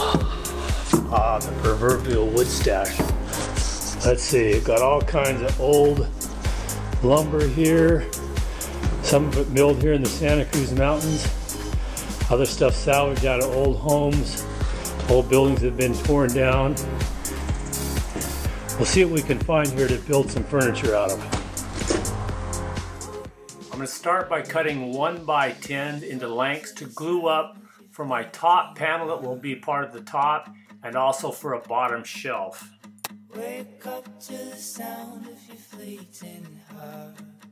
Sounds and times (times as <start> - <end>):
Music: 0.0 - 37.5
Speech: 1.1 - 3.1, 4.0 - 6.1, 7.0 - 8.1, 9.0 - 11.3, 12.3 - 14.4, 15.1 - 16.8, 18.8 - 21.3, 23.7 - 32.7.